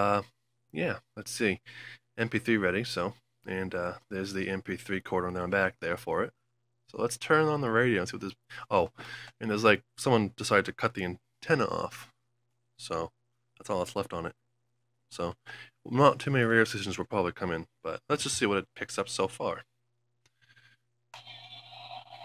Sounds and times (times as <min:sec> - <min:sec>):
Speech: 0:00.0 - 0:01.6, 0:02.2 - 0:12.2, 0:12.8 - 0:14.4, 0:15.1 - 0:19.7.